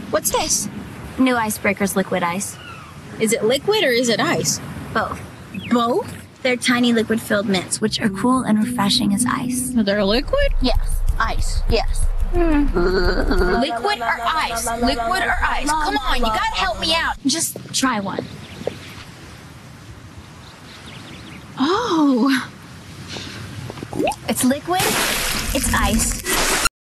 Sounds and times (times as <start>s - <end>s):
Speech: 3.2s - 18.3s, 24.3s - 24.9s, 25.5s - 26.2s.